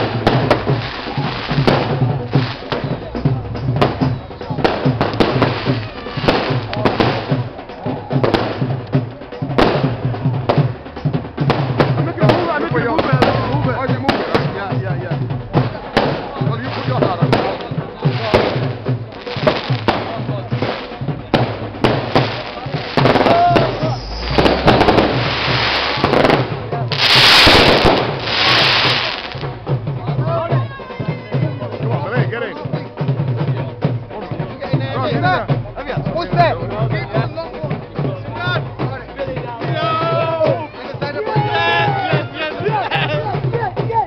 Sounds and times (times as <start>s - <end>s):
Firecracker: 0.0s - 29.9s
Music: 0.0s - 44.0s
Outside, urban or manmade: 0.0s - 44.0s
Speech: 12.0s - 21.4s, 29.8s - 44.0s.